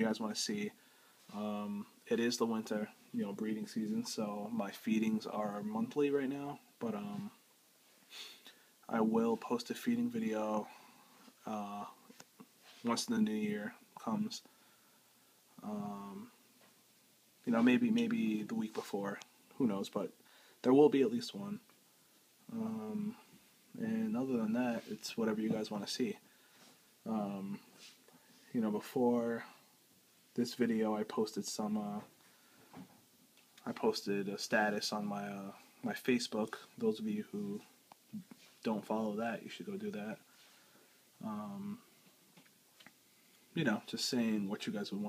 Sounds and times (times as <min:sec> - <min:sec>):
Speech: 0:00.0 - 0:07.4, 0:08.9 - 0:10.8, 0:11.4 - 0:12.1, 0:12.8 - 0:14.5, 0:15.6 - 0:16.4, 0:17.4 - 0:21.7, 0:22.5 - 0:26.2, 0:27.0 - 0:27.7, 0:28.5 - 0:29.6, 0:30.4 - 0:32.2, 0:33.6 - 0:40.2, 0:41.2 - 0:41.9, 0:43.6 - 0:45.0
Inside, small room: 0:00.0 - 0:45.0.